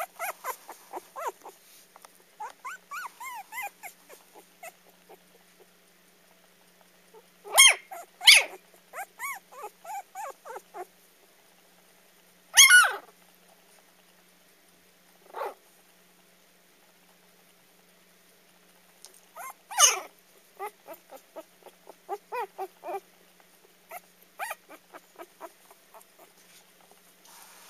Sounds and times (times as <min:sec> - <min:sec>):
Bark: 0:07.5 - 0:08.6, 0:12.6 - 0:13.0, 0:19.7 - 0:20.1.